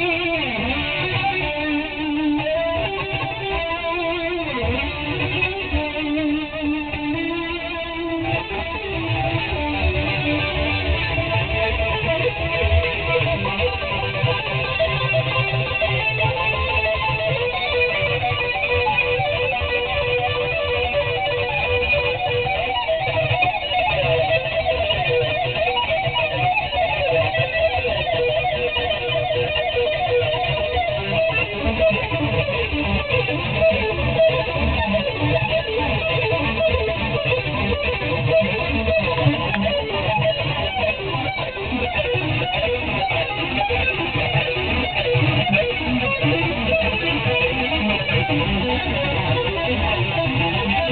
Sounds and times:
Electric guitar: 0.0s - 50.9s.

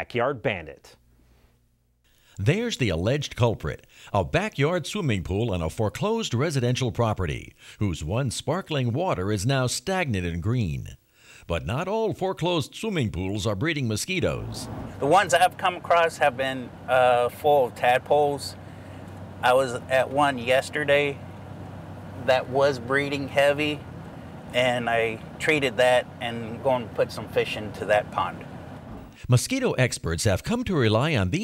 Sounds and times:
Speech: 0.0s - 1.0s, 2.4s - 18.6s, 19.4s - 21.2s, 22.2s - 23.8s, 24.5s - 28.5s, 29.2s - 31.4s.

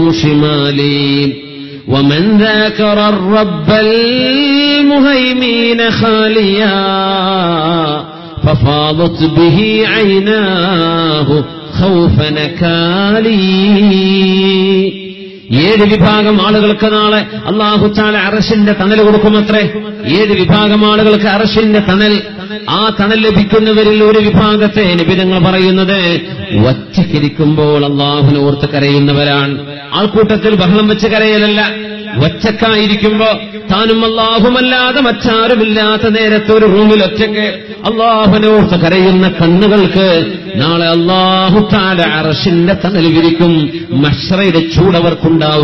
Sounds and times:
Male speech, man speaking: 0.0s - 45.6s
Narration, monologue: 0.0s - 45.6s.

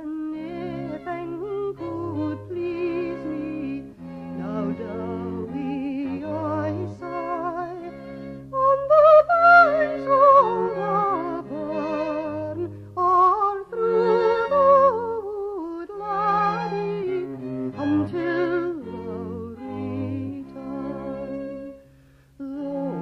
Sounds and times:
Violin, fiddle: 0.0s - 23.0s.

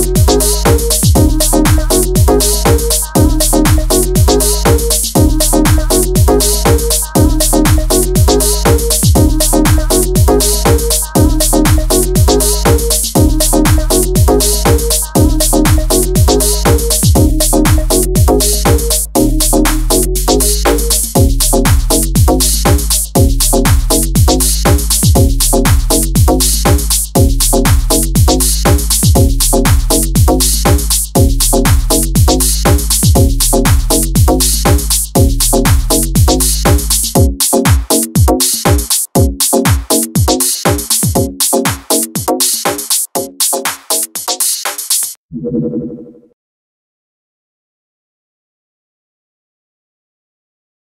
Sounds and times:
House music: 0.0s - 45.2s.

